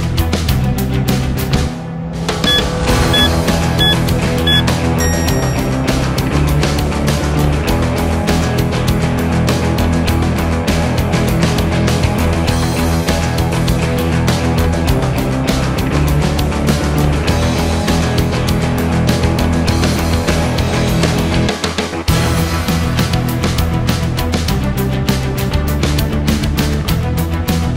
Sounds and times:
Music: 0.0 - 27.7.

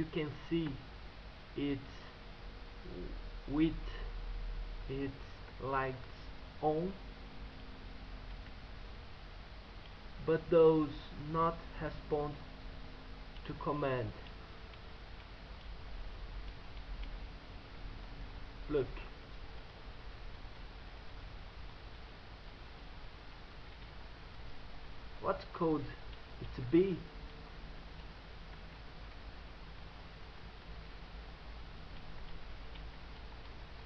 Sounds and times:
Speech: 0.0 - 0.8, 1.6 - 2.1, 2.9 - 4.1, 4.9 - 7.0, 10.2 - 12.4, 13.4 - 14.2, 18.7 - 19.2, 25.2 - 27.1.

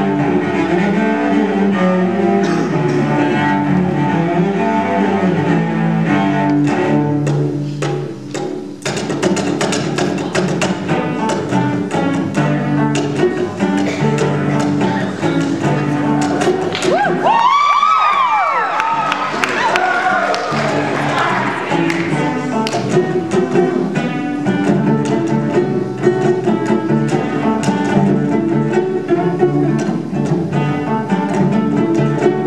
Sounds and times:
Cello: 0.0 - 32.4.

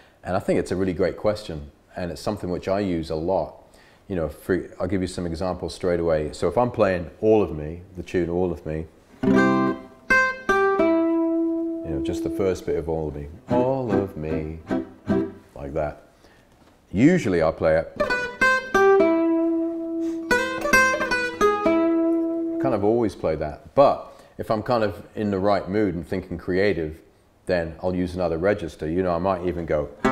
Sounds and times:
Speech: 0.2 - 8.9, 11.8 - 14.7, 15.6 - 16.0, 16.9 - 18.0, 22.6 - 30.0
Acoustic guitar: 9.0 - 16.4, 18.0 - 22.9, 29.7 - 30.1
Strum: 9.2 - 15.6, 18.0 - 23.0, 29.8 - 30.1.

